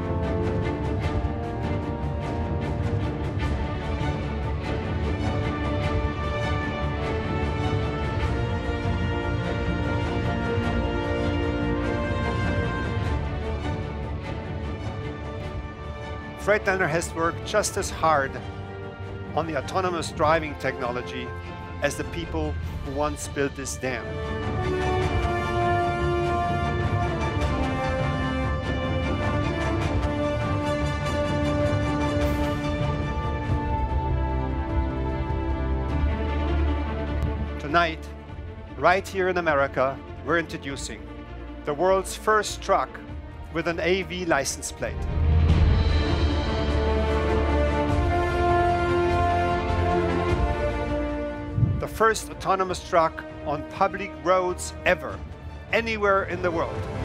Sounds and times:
Music: 0:00.0 - 0:57.0.

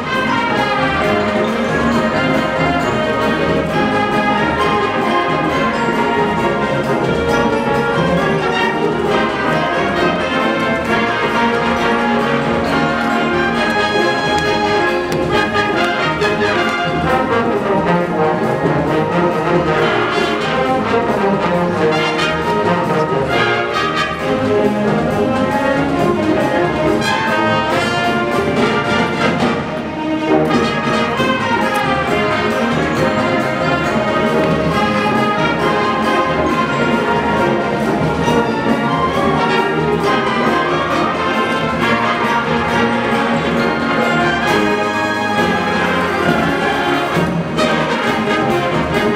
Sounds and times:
Orchestra: 0:00.0 - 0:49.1.

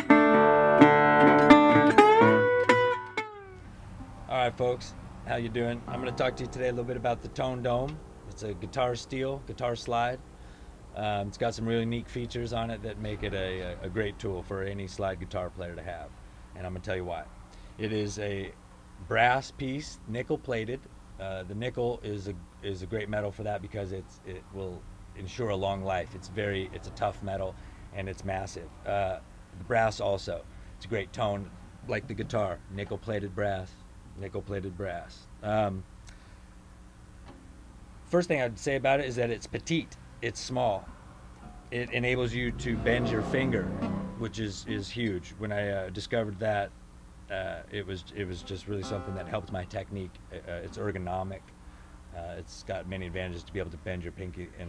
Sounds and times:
Speech: 0:04.3 - 0:10.2, 0:11.0 - 0:35.9, 0:38.1 - 0:40.8, 0:41.7 - 0:46.7, 0:47.3 - 0:51.5, 0:52.1 - 0:54.6.

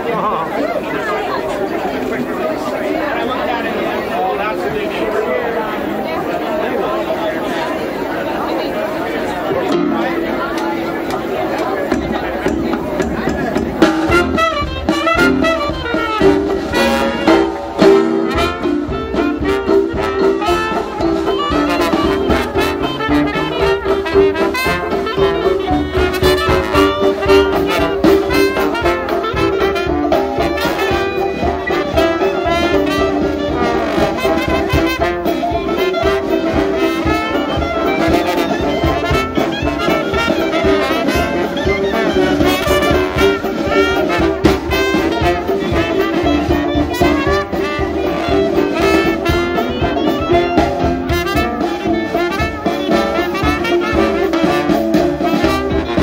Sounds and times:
Jazz: 0:00.5 - 0:56.0
Trumpet: 0:00.6 - 0:56.0
Trombone: 0:09.0 - 0:56.0.

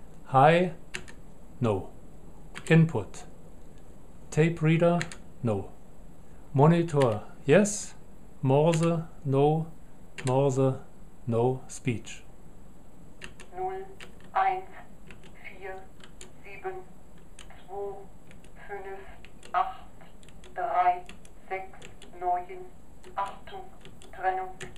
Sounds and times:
Narration, monologue: 0:00.0 - 0:24.7
Male speech, man speaking: 0:00.3 - 0:00.8, 0:01.6 - 0:01.9, 0:02.6 - 0:03.3, 0:04.3 - 0:05.8, 0:06.6 - 0:12.3
Female speech, woman speaking: 0:13.6 - 0:14.8, 0:15.4 - 0:15.9, 0:16.5 - 0:16.9, 0:17.5 - 0:19.9, 0:20.6 - 0:24.7.

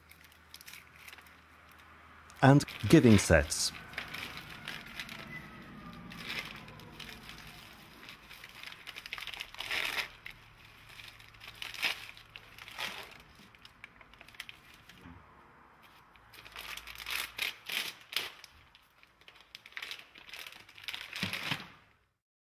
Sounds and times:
Crackle: 0:00.0 - 0:01.9, 0:03.7 - 0:15.0, 0:15.8 - 0:22.0
Speech: 0:02.4 - 0:03.8.

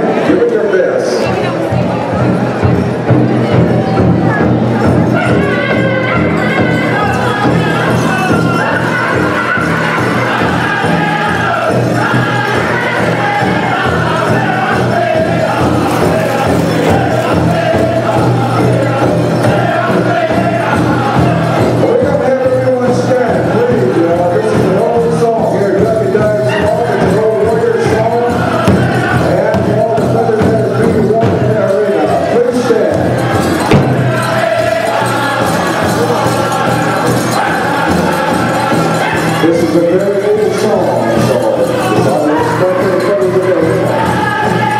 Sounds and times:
Music: 0:00.0 - 0:44.7.

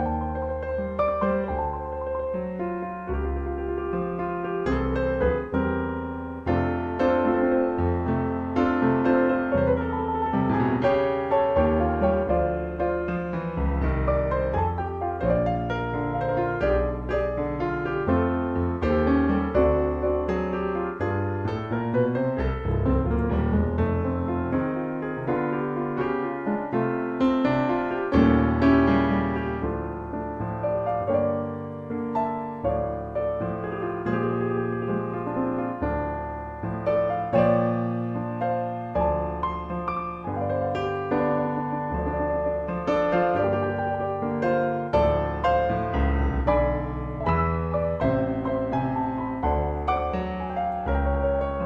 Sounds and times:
Electric piano: 0:00.0 - 0:51.6.

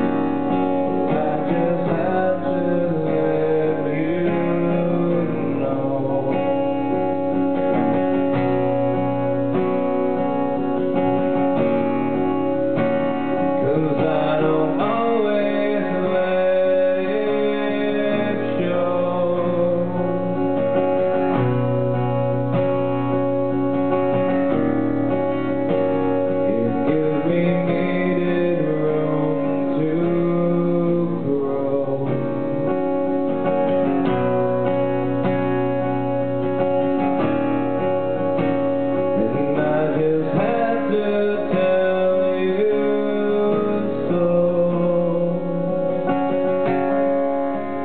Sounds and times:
Music: 0:00.0 - 0:47.8.

